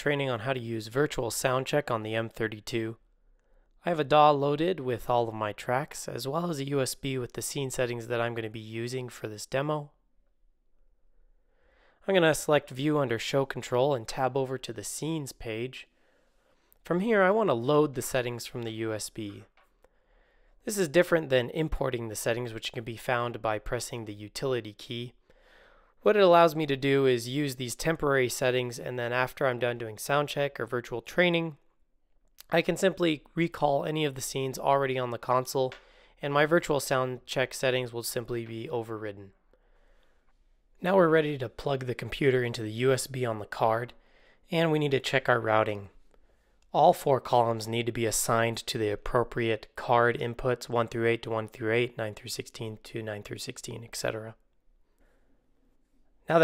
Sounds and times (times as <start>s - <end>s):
Speech: 0.0s - 3.0s, 3.8s - 10.0s, 12.0s - 15.9s, 16.8s - 19.5s, 20.6s - 25.2s, 26.0s - 31.6s, 32.4s - 39.4s, 40.8s - 46.0s, 46.7s - 54.4s.